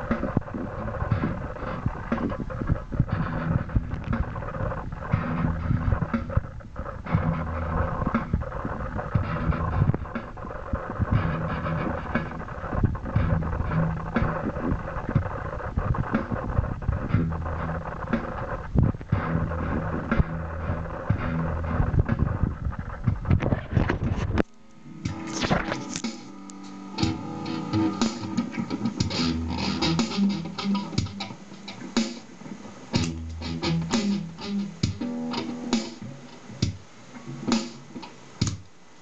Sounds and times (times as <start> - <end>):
Crackle: 0.0 - 26.7
Music: 0.0 - 38.7.